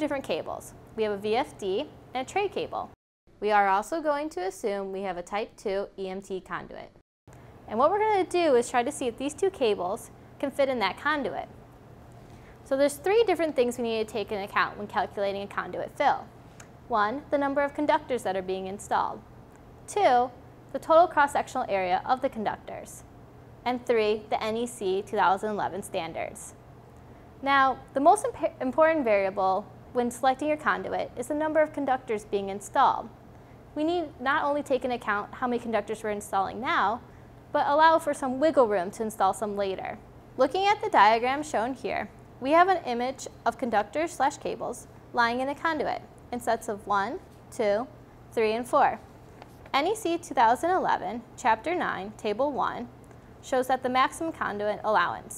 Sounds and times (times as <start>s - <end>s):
Speech: 0.0s - 7.0s, 7.7s - 11.5s, 12.7s - 16.3s, 16.9s - 19.2s, 19.9s - 23.1s, 23.7s - 26.6s, 27.4s - 33.1s, 33.8s - 49.0s, 49.7s - 55.3s.